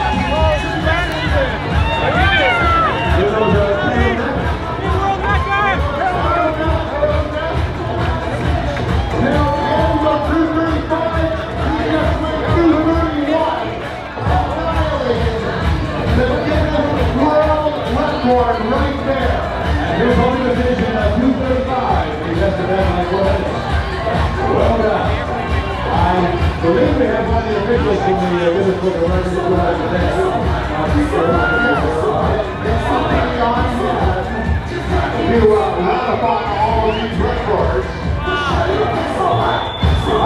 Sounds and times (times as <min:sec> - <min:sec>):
Music: 0:00.0 - 0:40.2
Speech: 0:09.2 - 0:23.6, 0:24.2 - 0:40.2.